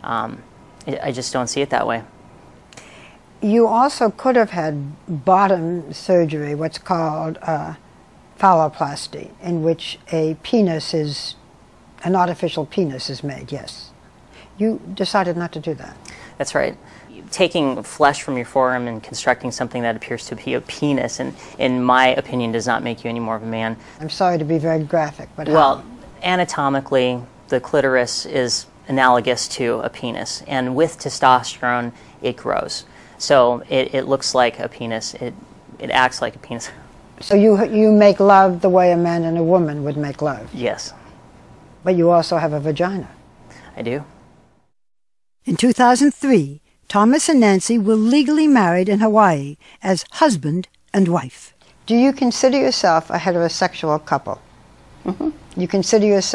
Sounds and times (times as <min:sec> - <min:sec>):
Male speech, man speaking: 0:00.0 - 0:02.1, 0:12.0 - 0:13.9, 0:14.6 - 0:41.0, 0:41.9 - 0:43.2, 0:43.8 - 0:44.1.